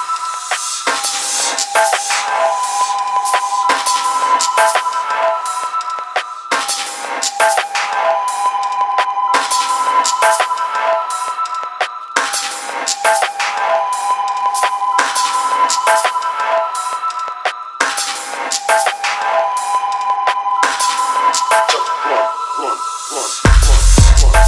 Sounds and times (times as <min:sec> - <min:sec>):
Music: 0:00.0 - 0:24.4.